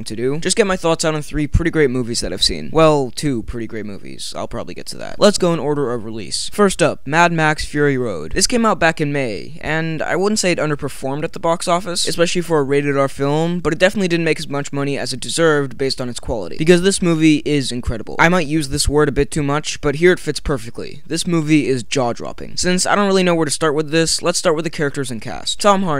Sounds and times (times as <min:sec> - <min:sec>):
Speech: 0:00.0 - 0:25.9.